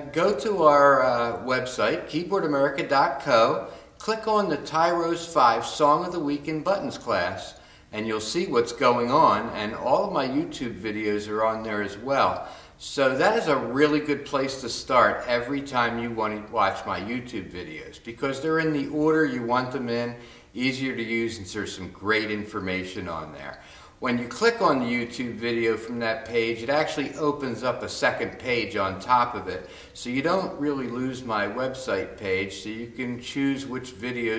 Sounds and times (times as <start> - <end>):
Speech: 0.0 - 34.3.